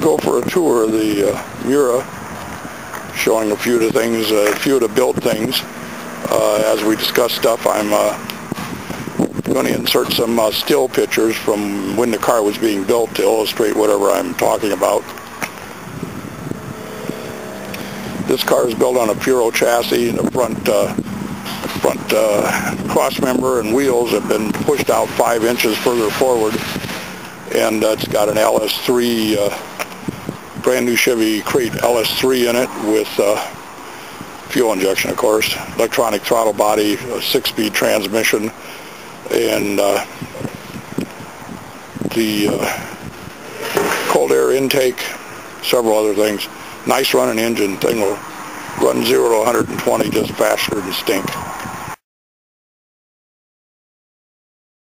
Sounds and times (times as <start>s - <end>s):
Speech: 0.0s - 2.1s, 3.1s - 8.2s, 9.4s - 15.1s, 18.3s - 26.7s, 27.5s - 29.6s, 30.6s - 33.6s, 34.5s - 38.6s, 39.3s - 40.1s, 42.1s - 42.9s, 43.9s - 48.2s, 48.8s - 51.4s.